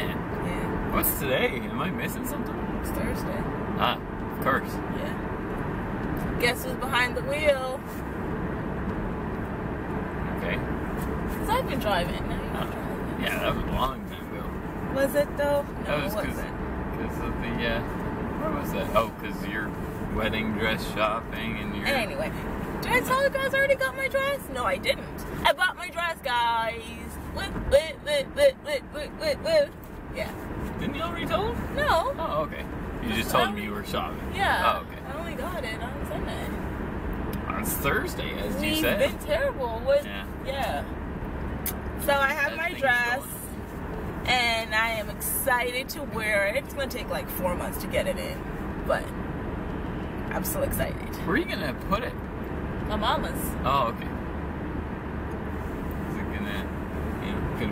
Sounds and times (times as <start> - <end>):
Car: 0.0 - 57.7
Speech: 3.8 - 5.1, 13.2 - 14.5, 31.2 - 36.4, 37.5 - 40.8.